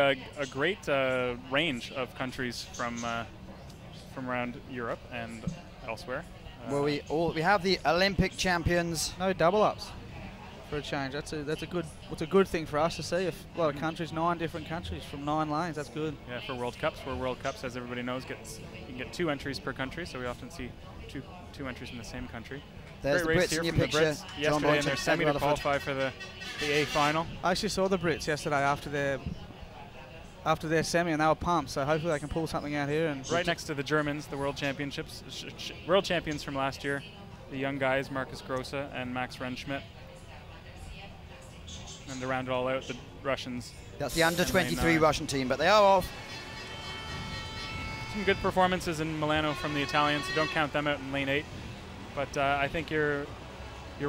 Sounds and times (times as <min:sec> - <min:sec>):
Speech: 0:04.1 - 0:46.1, 0:48.1 - 0:51.4.